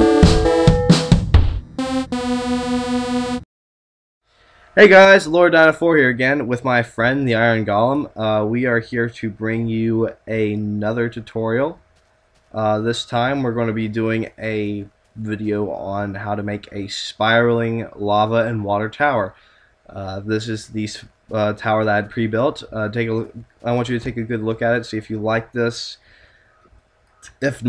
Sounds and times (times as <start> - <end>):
Speech: 4.8 - 11.8, 12.6 - 26.0, 27.2 - 27.6.